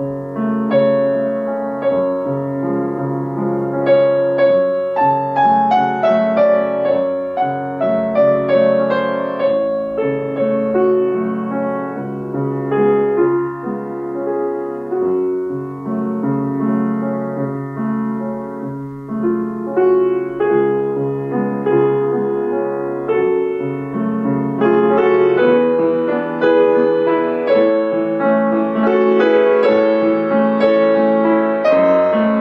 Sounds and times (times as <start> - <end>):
Piano: 0.0 - 32.4.